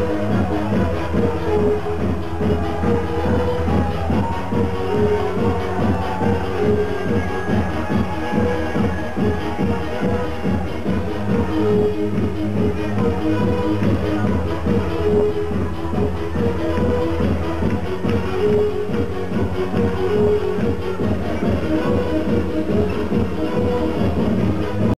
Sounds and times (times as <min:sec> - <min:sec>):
Music: 0:00.0 - 0:24.9.